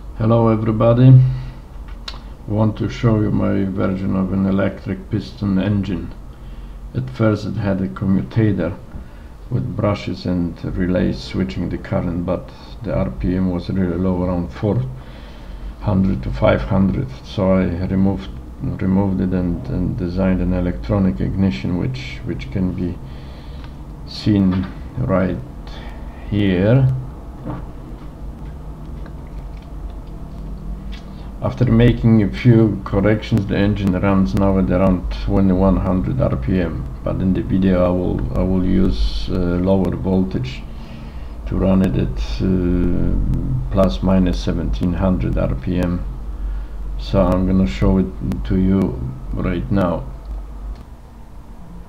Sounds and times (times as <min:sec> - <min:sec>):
Speech: 0:00.2 - 0:01.4, 0:02.5 - 0:06.2, 0:07.0 - 0:08.8, 0:09.5 - 0:15.0, 0:15.8 - 0:23.0, 0:24.1 - 0:27.0, 0:31.4 - 0:40.7, 0:41.5 - 0:46.1, 0:47.0 - 0:50.2.